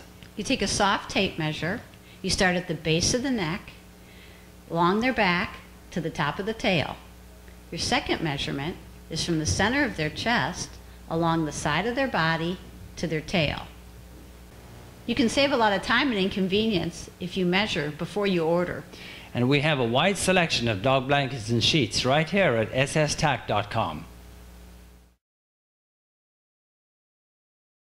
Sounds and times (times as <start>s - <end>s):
Speech: 0.4s - 3.8s, 4.7s - 7.0s, 7.7s - 13.7s, 15.1s - 24.1s.